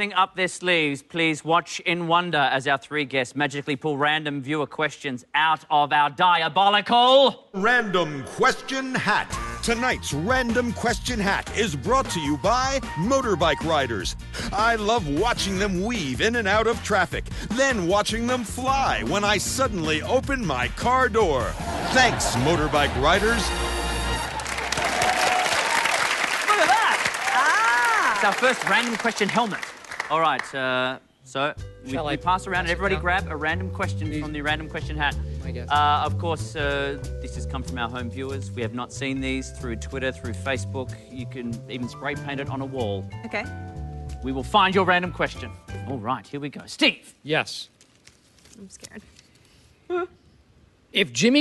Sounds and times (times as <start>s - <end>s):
Music: 8.4s - 25.2s, 31.3s - 46.6s.